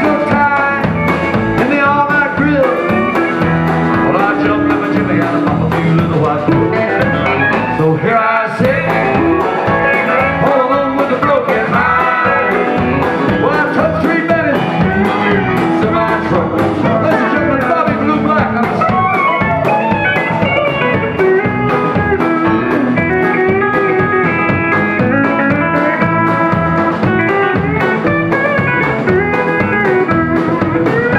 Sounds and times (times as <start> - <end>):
Music: 0.0 - 31.1.